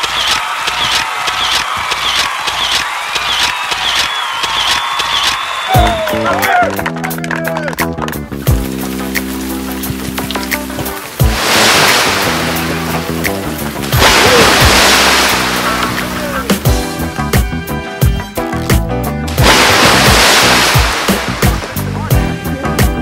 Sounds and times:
Music: 0.0s - 23.0s
Waterfall: 8.5s - 16.6s, 19.4s - 21.8s.

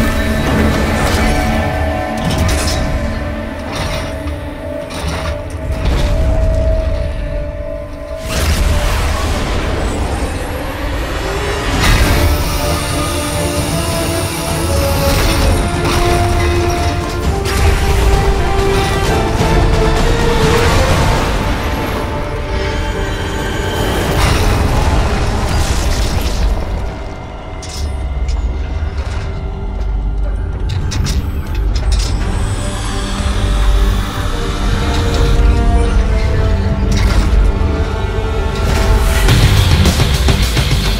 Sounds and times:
Music: 0.0s - 40.9s.

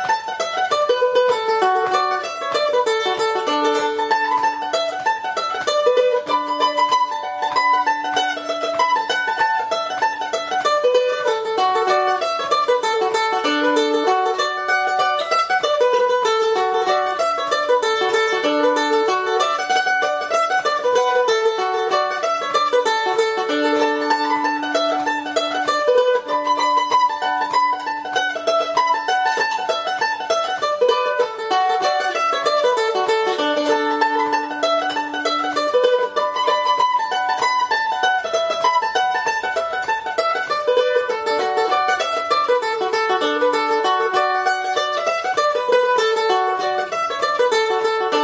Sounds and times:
Mandolin: 0.0s - 48.2s.

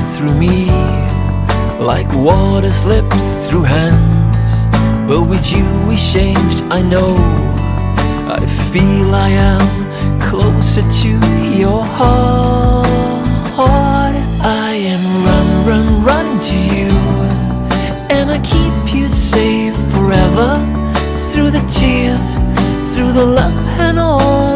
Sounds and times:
Music: 0.0s - 24.5s.

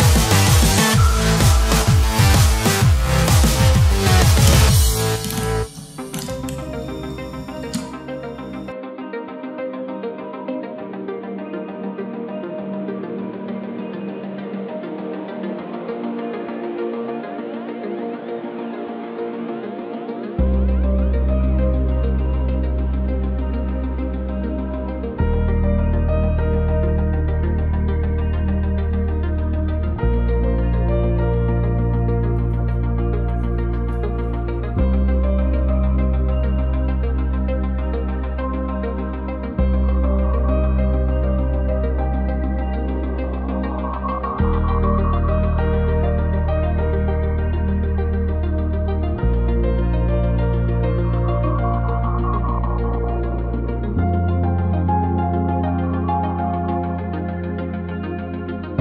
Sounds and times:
Music: 0.0s - 58.8s.

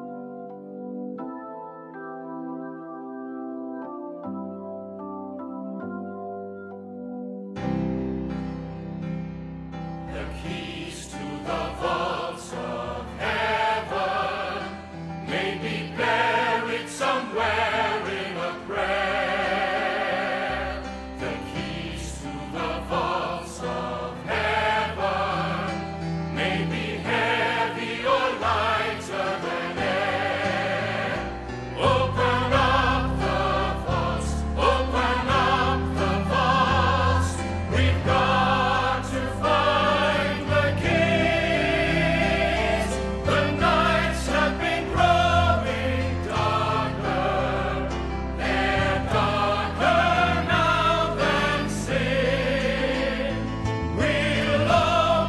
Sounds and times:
Music: 0.0s - 55.2s.

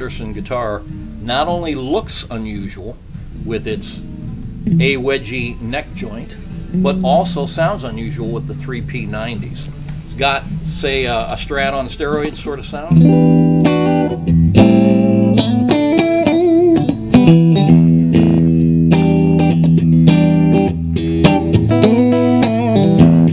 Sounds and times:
Speech: 0.0s - 4.0s, 4.7s - 13.0s
Acoustic guitar: 0.0s - 23.3s
Strum: 0.0s - 23.3s
Electric guitar: 3.2s - 11.5s, 12.9s - 23.3s.

